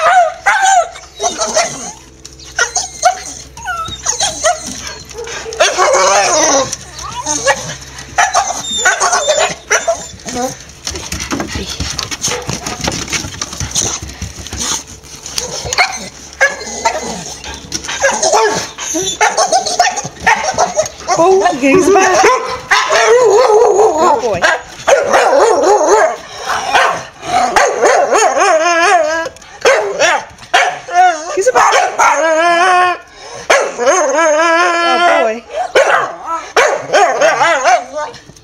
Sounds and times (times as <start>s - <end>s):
Bark: 0.0s - 0.9s, 19.2s - 20.8s, 22.1s - 23.7s, 24.4s - 28.4s, 29.6s - 30.9s, 31.6s - 32.2s, 33.5s - 33.8s, 35.7s - 38.0s
Speech: 21.1s - 22.3s, 24.0s - 24.5s, 34.6s - 35.5s.